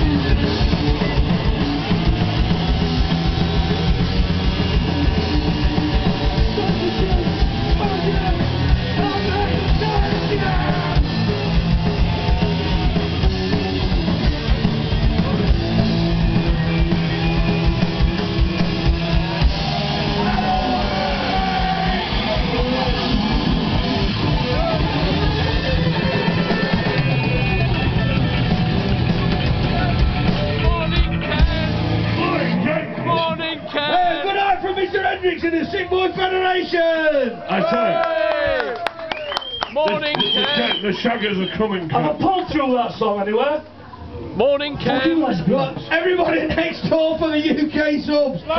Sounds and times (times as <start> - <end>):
Music: 0.0 - 34.0
Speech: 6.4 - 11.0, 30.6 - 38.5, 39.8 - 43.7, 44.4 - 48.5.